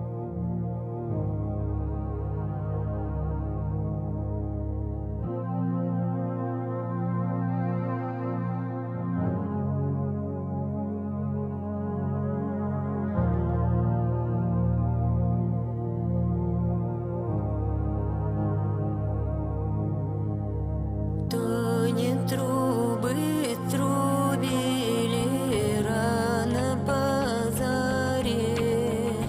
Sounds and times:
Music: 0.0 - 29.2.

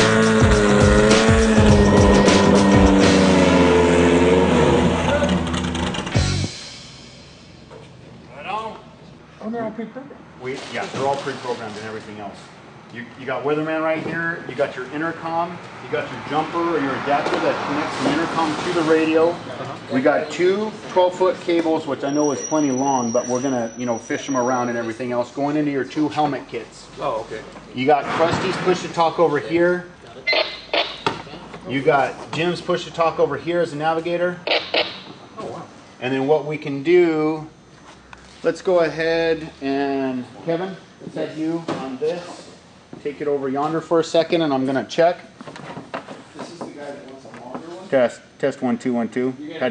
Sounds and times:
Speech: 9.4 - 30.3, 38.4 - 45.3.

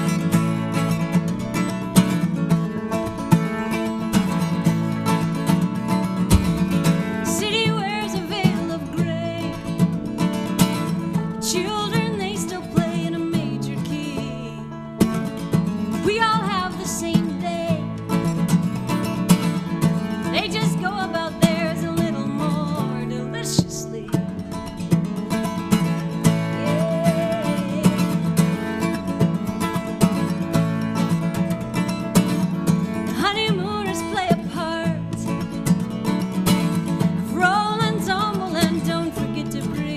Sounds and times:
Independent music: 0.0 - 39.9.

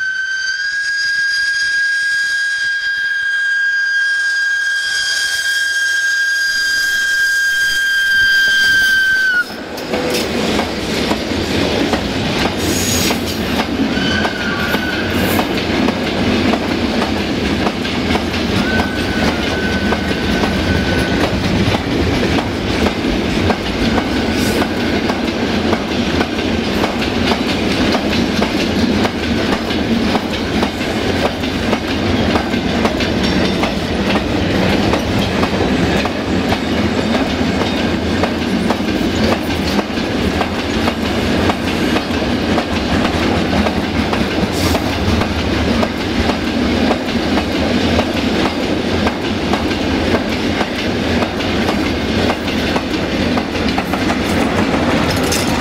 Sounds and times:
Railroad car, train wagon: 0.0 - 55.6.

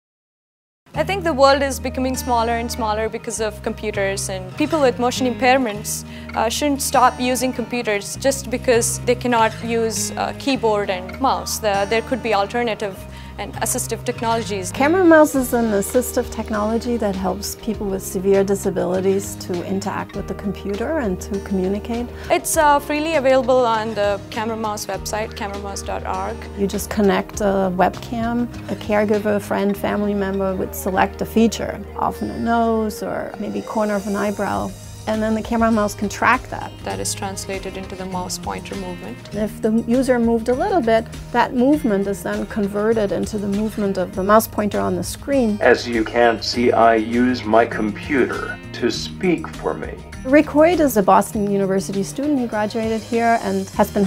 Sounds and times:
Music: 0.9 - 54.0
Speech: 1.0 - 54.0.

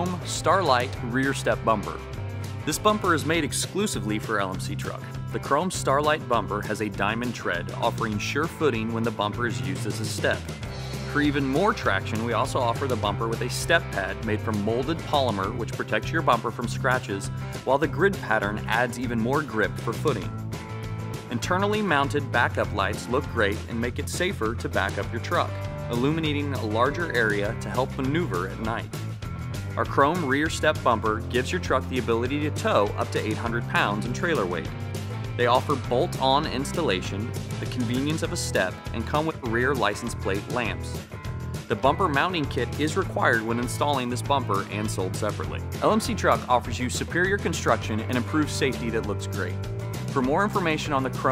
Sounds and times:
Speech: 0.0 - 2.0, 2.7 - 10.5, 11.1 - 20.3, 21.3 - 28.9, 29.8 - 34.8, 35.4 - 41.0, 41.7 - 49.6, 50.2 - 51.3
Music: 0.0 - 51.3.

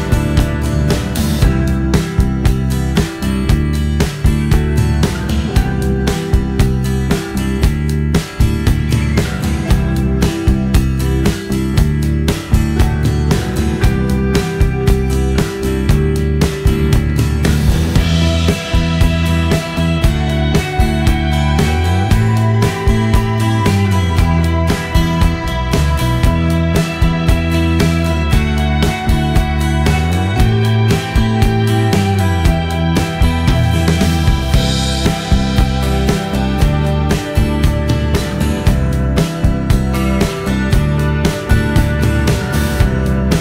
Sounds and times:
Music: 0.0 - 43.4.

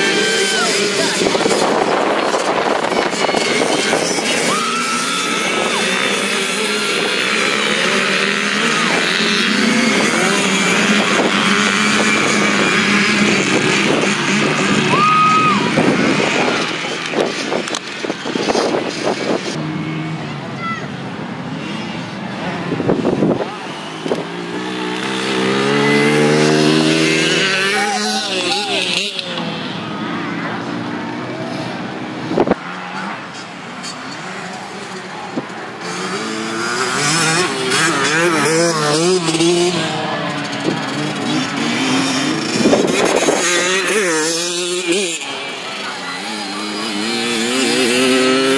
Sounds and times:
Motorcycle: 0.0 - 48.5.

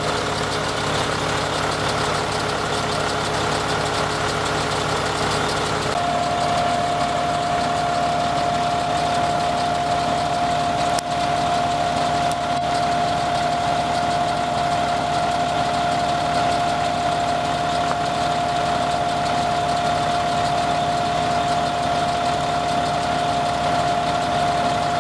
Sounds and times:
Engine: 0.0 - 25.0
Truck: 0.0 - 25.0
Emergency vehicle: 5.8 - 25.0.

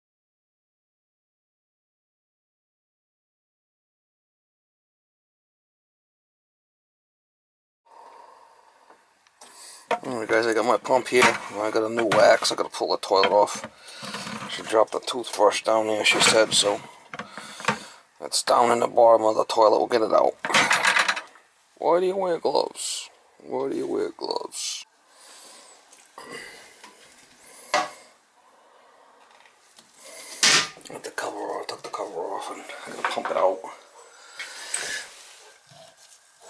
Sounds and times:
Speech: 10.0 - 13.6, 14.5 - 16.9, 18.2 - 20.4, 21.8 - 24.9, 30.9 - 33.8.

